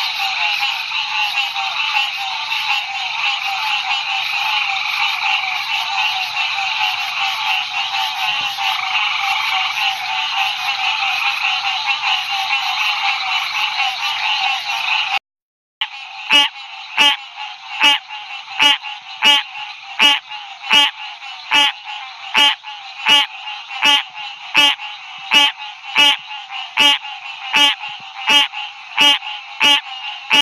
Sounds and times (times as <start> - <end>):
Croak: 0.0 - 15.2, 15.8 - 30.4.